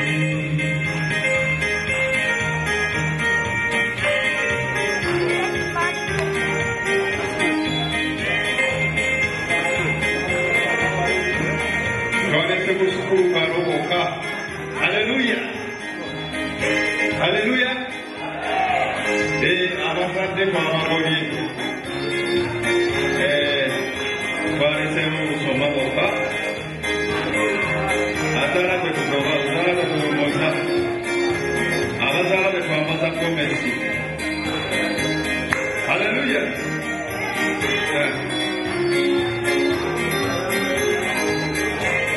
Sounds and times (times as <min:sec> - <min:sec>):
Music: 0:00.0 - 0:42.1
Speech: 0:12.2 - 0:14.2, 0:19.4 - 0:21.7, 0:23.2 - 0:26.4, 0:27.2 - 0:30.9, 0:32.0 - 0:33.9, 0:35.9 - 0:38.3.